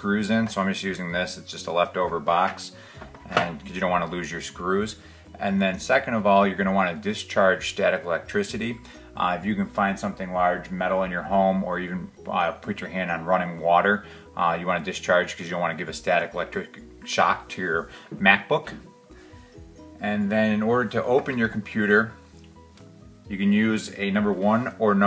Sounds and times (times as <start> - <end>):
Speech: 0.0 - 18.9, 20.0 - 22.2, 23.3 - 25.0
Music: 0.0 - 25.0.